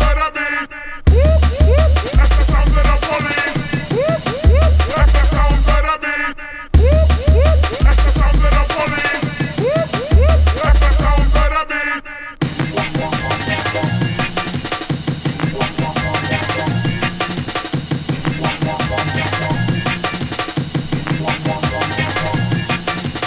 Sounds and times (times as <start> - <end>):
Music: 0.0 - 0.4, 1.1 - 11.8, 12.4 - 23.2.